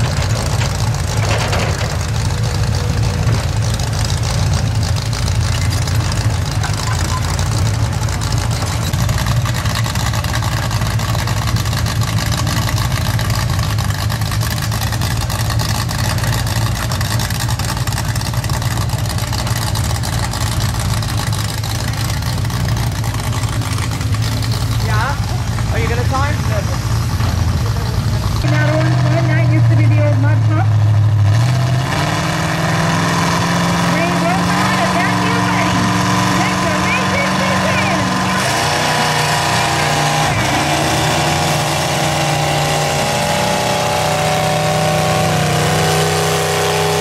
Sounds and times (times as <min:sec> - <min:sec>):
Speech: 0:24.8 - 0:26.8, 0:33.9 - 0:38.4.